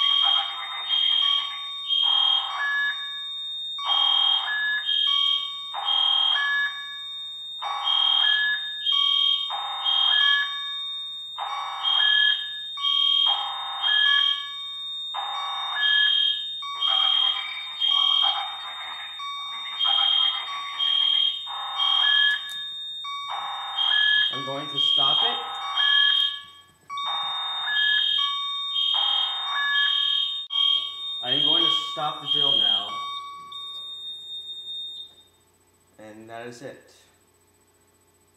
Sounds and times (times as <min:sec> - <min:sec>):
Speech: 0:00.0 - 0:01.6, 0:16.9 - 0:21.2, 0:24.3 - 0:25.5, 0:31.2 - 0:33.0, 0:36.0 - 0:37.1
Fire alarm: 0:00.0 - 0:38.3.